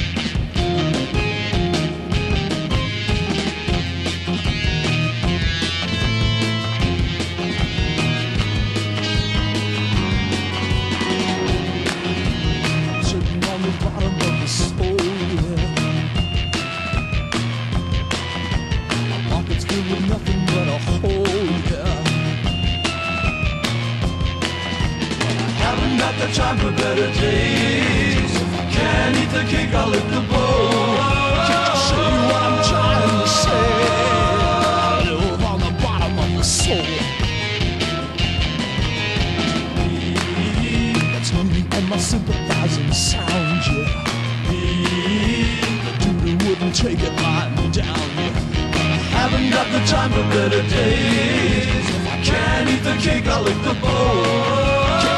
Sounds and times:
Music: 0.0s - 55.1s.

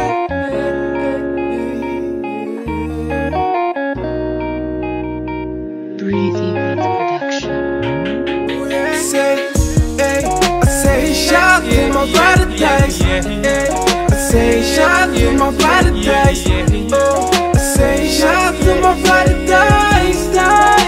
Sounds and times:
Music: 0.0s - 20.8s.

